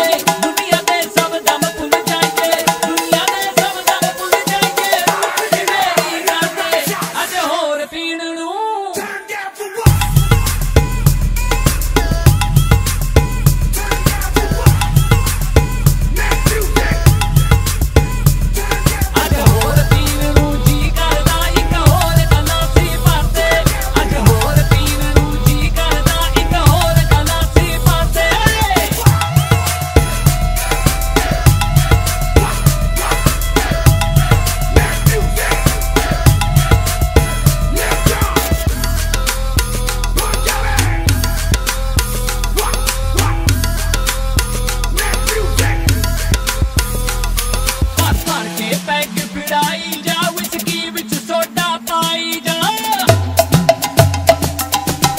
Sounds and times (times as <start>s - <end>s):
Percussion: 0.0s - 8.1s, 8.9s - 55.1s.